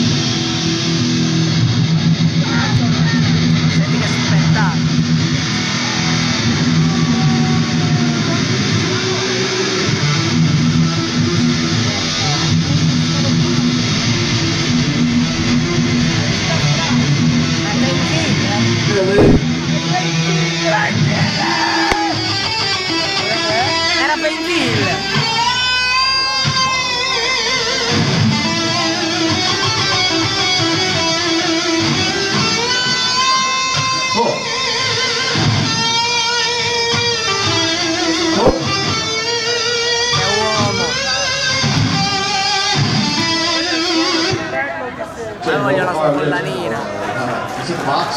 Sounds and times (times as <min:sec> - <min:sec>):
Bass guitar: 0:00.0 - 0:44.5
Electric guitar: 0:00.0 - 0:47.6.